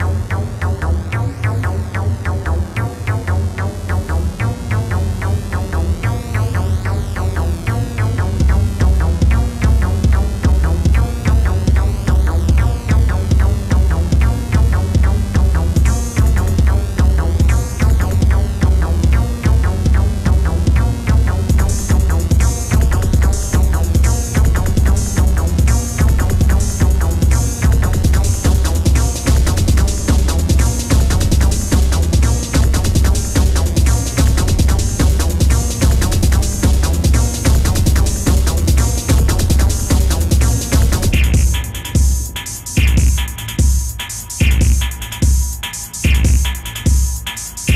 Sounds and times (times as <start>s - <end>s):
Music: 0.0s - 47.7s.